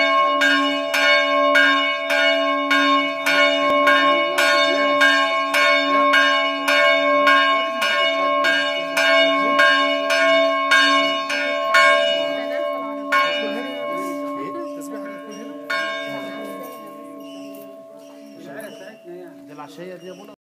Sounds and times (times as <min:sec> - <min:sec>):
Church bell: 0:00.0 - 0:20.4.